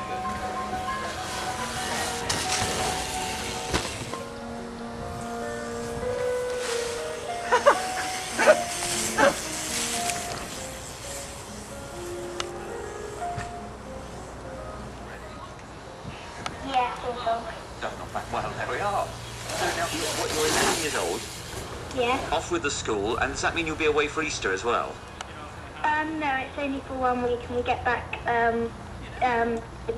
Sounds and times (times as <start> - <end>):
Bicycle: 0.0 - 14.5, 18.2 - 23.8.